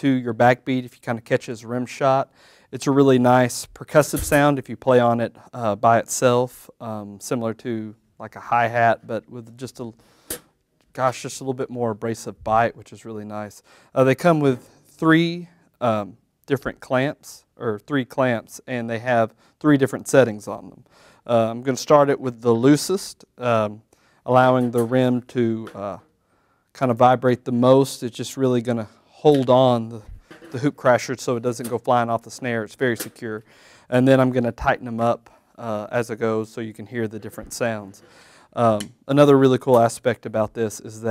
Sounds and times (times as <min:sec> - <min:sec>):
Speech: 0:00.0 - 0:10.0, 0:10.9 - 0:26.1, 0:26.8 - 0:38.0, 0:38.6 - 0:41.1.